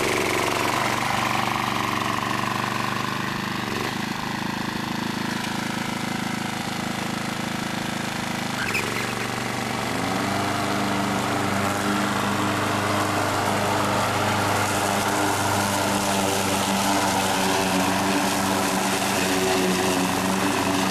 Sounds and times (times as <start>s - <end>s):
Lawn mower: 0.0s - 20.9s
Vehicle: 0.0s - 20.9s.